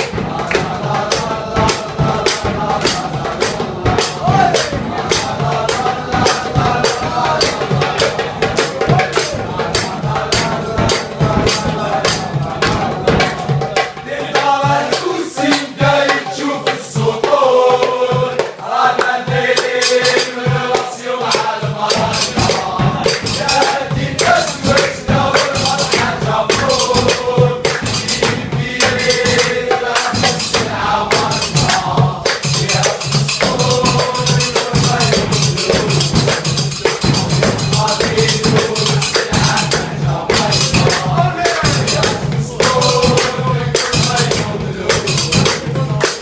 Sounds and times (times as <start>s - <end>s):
Music: 0.0s - 46.2s.